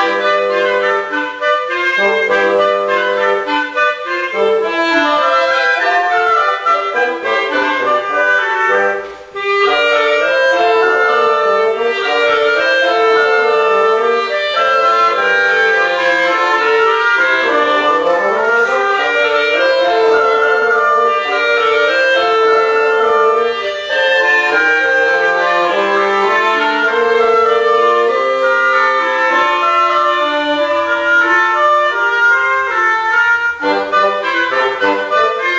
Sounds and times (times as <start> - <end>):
Music: 0.0 - 35.5.